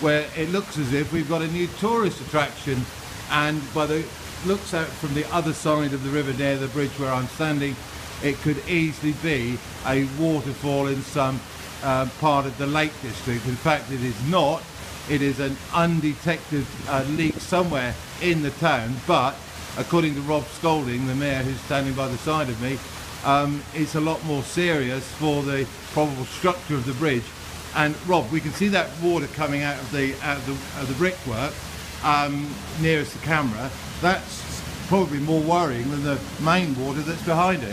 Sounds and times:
Speech: 0.0s - 37.7s.

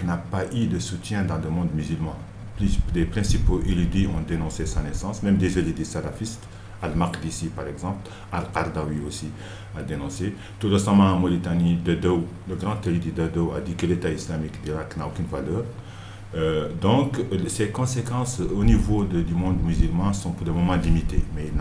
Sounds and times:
Speech: 0.0s - 21.6s.

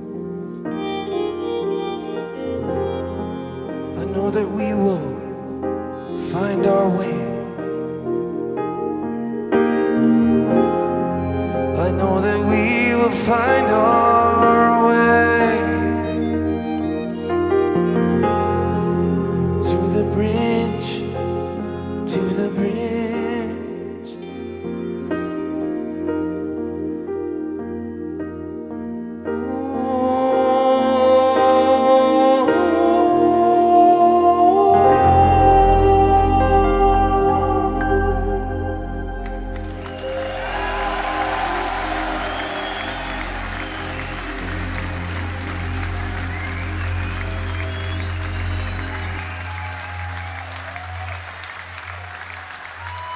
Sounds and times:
Musical instrument: 0.0s - 53.1s
New-age music: 0.0s - 53.1s
Singing: 11.2s - 17.8s, 19.3s - 24.5s, 29.4s - 49.4s
Crowd: 39.3s - 53.1s.

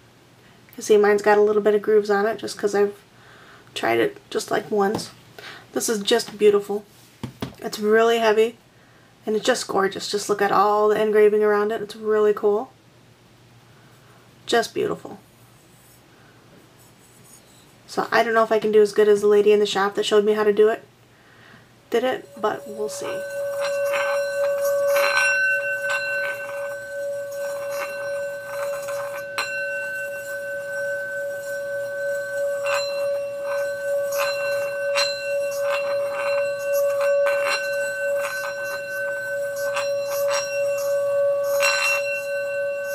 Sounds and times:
Singing bowl: 22.1s - 42.9s.

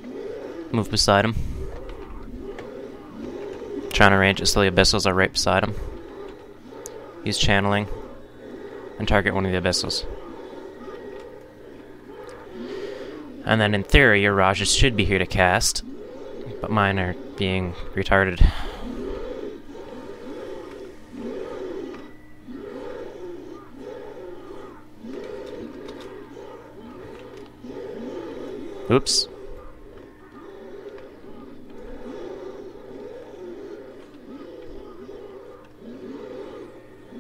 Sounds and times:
Speech: 13.5s - 15.8s, 16.6s - 18.6s, 28.9s - 29.3s.

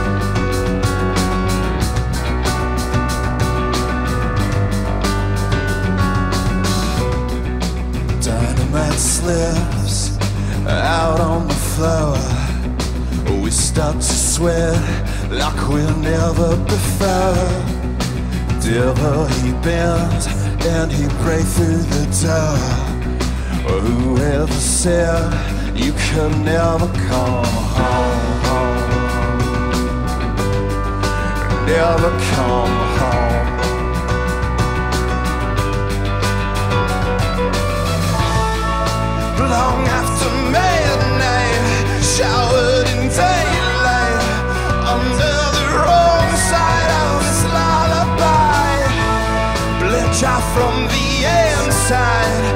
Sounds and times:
Music: 0.0s - 52.5s.

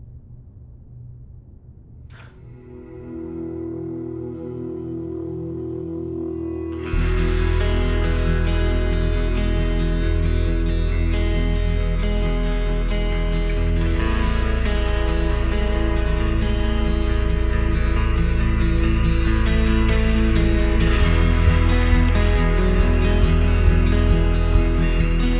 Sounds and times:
Music: 1.8s - 25.3s.

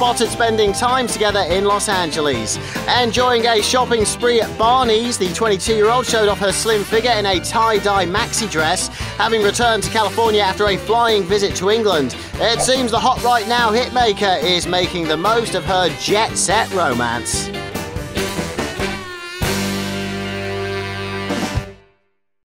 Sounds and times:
Speech: 0.0s - 17.5s
Music: 0.0s - 22.3s.

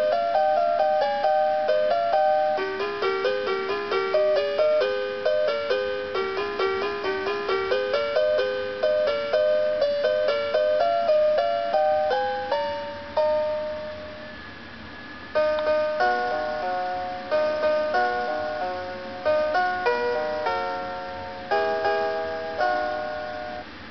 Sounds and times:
Music: 0.0s - 23.9s.

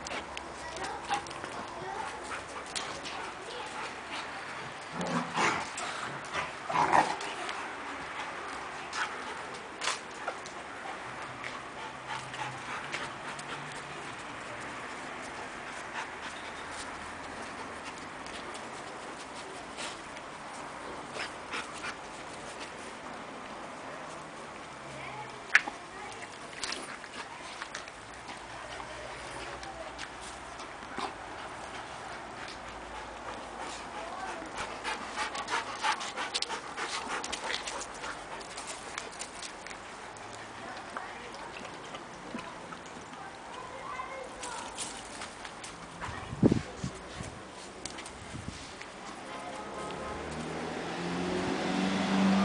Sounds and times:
Speech: 0.5s - 5.2s, 24.8s - 26.5s, 28.6s - 30.3s, 33.9s - 34.7s, 40.6s - 45.0s, 49.0s - 50.3s.

